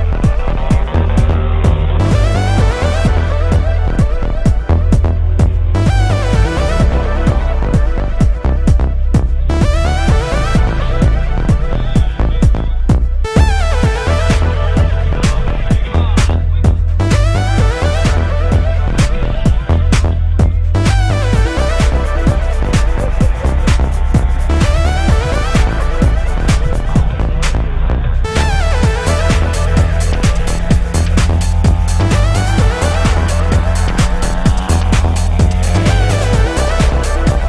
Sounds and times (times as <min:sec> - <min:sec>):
Music: 0:00.0 - 0:37.4
Speech: 0:14.1 - 0:21.2.